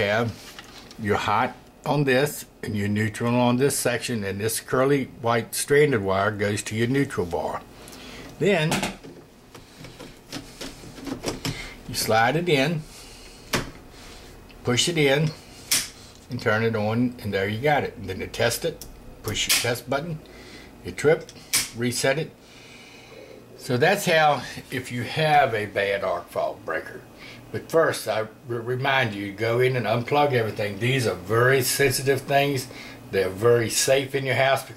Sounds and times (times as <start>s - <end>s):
Speech: 0.0s - 0.4s, 1.0s - 7.7s, 8.4s - 9.0s, 11.9s - 12.9s, 14.6s - 15.4s, 16.3s - 20.2s, 20.8s - 22.4s, 23.6s - 34.7s
Inside, small room: 0.0s - 34.7s.